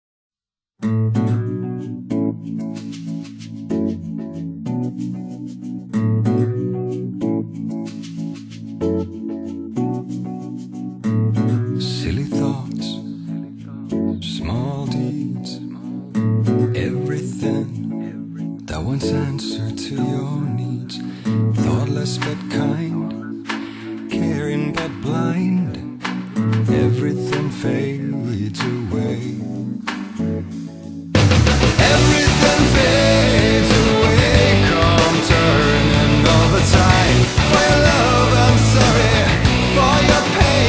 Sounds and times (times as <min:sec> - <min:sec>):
Acoustic guitar: 0:00.8 - 0:40.6.